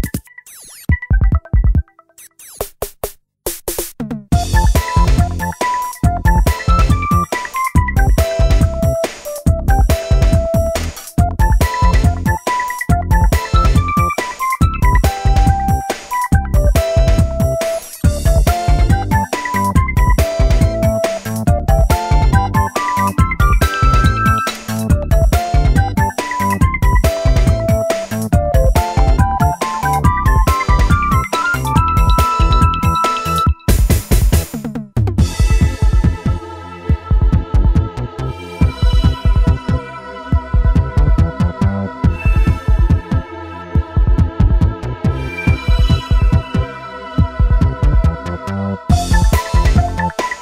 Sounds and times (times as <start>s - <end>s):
Electronic music: 0.0s - 2.8s, 4.4s - 37.0s, 38.3s - 41.4s, 42.0s - 50.4s.